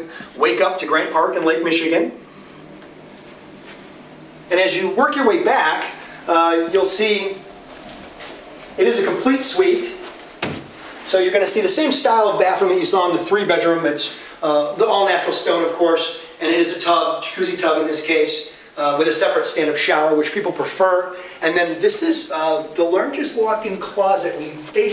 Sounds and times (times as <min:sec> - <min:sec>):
Speech: 0:00.0 - 0:02.2, 0:04.5 - 0:07.4, 0:08.8 - 0:10.1, 0:11.0 - 0:24.9.